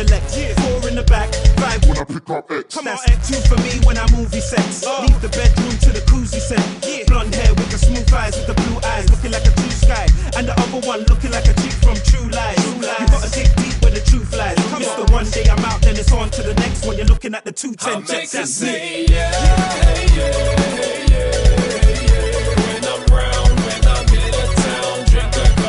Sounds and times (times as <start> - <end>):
Music: 0.0 - 2.0, 2.9 - 17.3, 18.1 - 25.6.